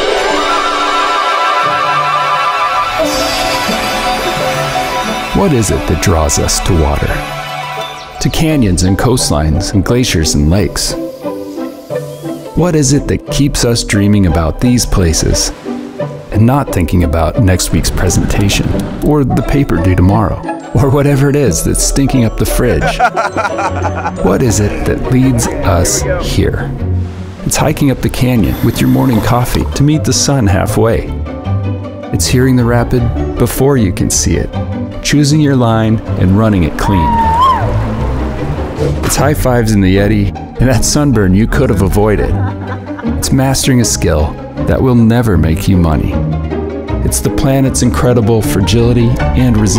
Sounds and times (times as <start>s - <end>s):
Music: 0.0s - 49.7s
Speech: 5.4s - 7.2s, 8.2s - 11.0s, 12.6s - 15.6s, 16.3s - 23.0s, 24.2s - 26.8s, 27.5s - 31.2s, 32.1s - 37.3s, 39.0s - 42.4s, 43.2s - 46.2s, 47.0s - 49.7s.